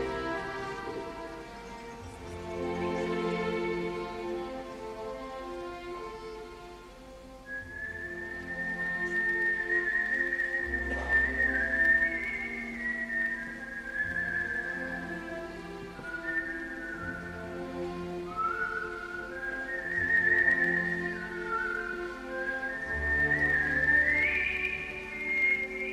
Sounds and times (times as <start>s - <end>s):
Whistling: 7.4s - 25.9s.